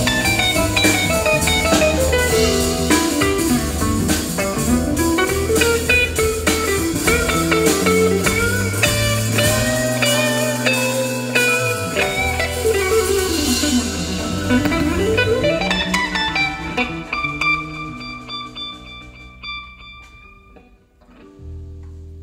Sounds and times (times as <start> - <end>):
Blues: 0.0 - 22.2
Guitar: 0.0 - 22.2
Jazz: 0.0 - 22.2.